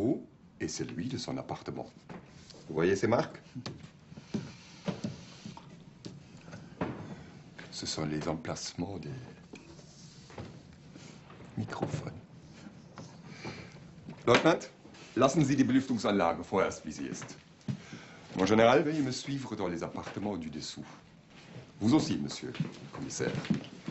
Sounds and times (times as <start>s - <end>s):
Speech: 0.0s - 2.0s, 2.7s - 3.7s, 7.7s - 9.4s, 11.6s - 12.2s, 14.3s - 17.4s, 18.4s - 21.0s, 21.8s - 23.6s.